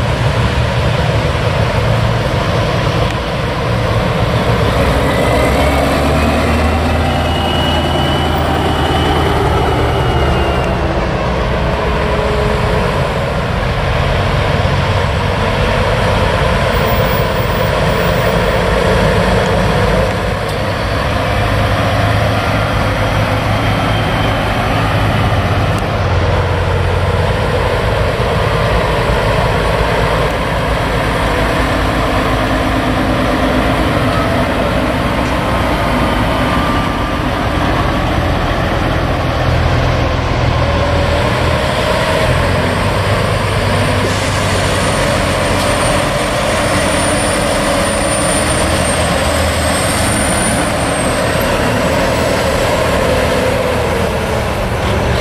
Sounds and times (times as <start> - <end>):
Truck: 0.0 - 55.2.